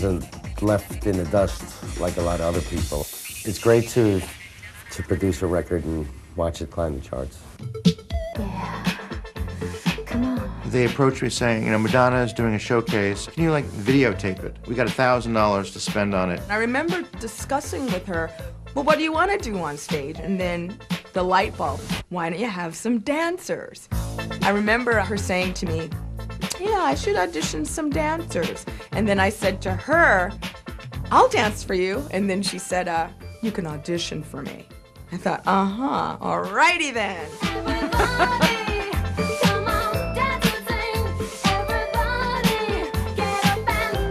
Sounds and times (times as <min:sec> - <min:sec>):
Music: 0:00.0 - 0:44.1.